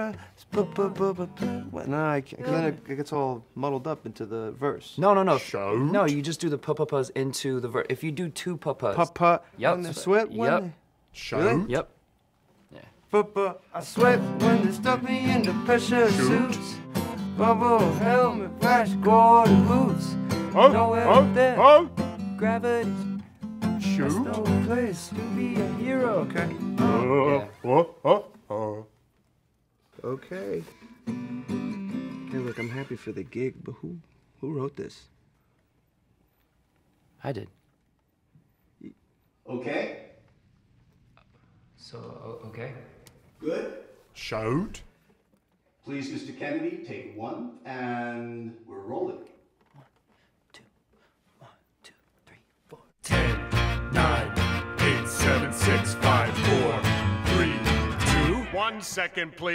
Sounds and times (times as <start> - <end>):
Music: 0.0 - 2.8, 13.8 - 27.4, 30.6 - 33.0, 53.0 - 59.5
Speech: 1.7 - 11.9, 45.8 - 49.4.